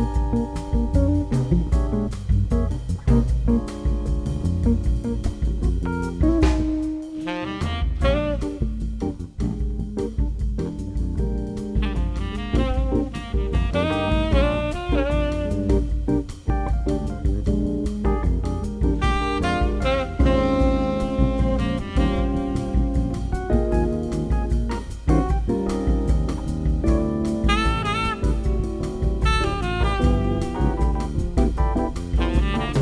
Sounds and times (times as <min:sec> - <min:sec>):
Music: 0:00.0 - 0:32.8.